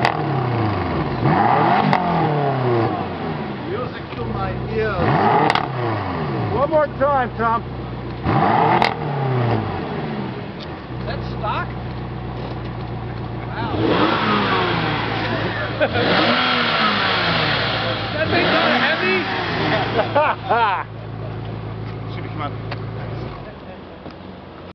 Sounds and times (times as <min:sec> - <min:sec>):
Accelerating, revving, vroom: 0:00.0 - 0:03.4, 0:05.0 - 0:06.6, 0:08.2 - 0:10.2, 0:13.7 - 0:20.1
Car: 0:00.0 - 0:24.7
Speech: 0:03.7 - 0:05.1, 0:06.5 - 0:07.7, 0:11.0 - 0:11.8, 0:13.1 - 0:13.9, 0:17.7 - 0:19.3, 0:22.0 - 0:24.1.